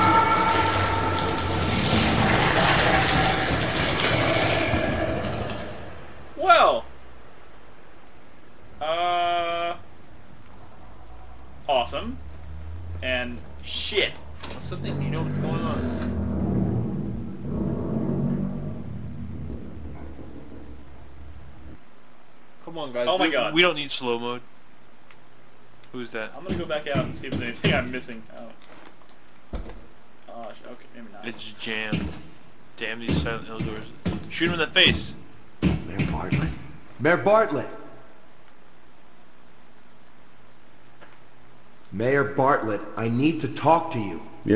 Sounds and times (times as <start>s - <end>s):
Speech: 22.6s - 24.5s, 25.9s - 28.6s, 32.8s - 35.2s, 41.9s - 44.5s.